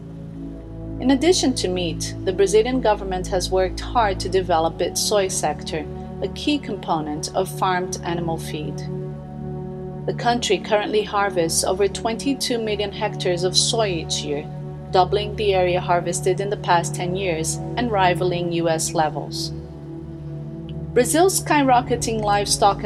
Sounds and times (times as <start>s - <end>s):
Music: 0.0s - 22.8s
Speech: 1.0s - 8.9s, 10.1s - 19.5s, 21.0s - 22.8s.